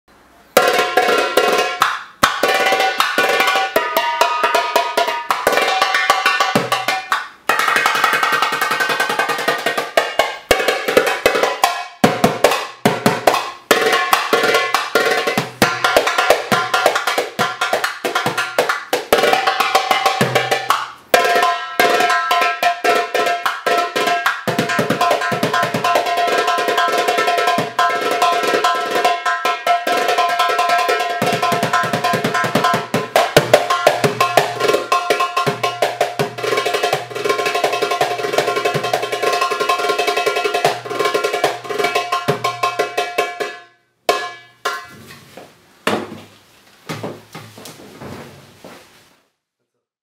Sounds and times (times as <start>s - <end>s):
Drum: 0.5s - 45.2s.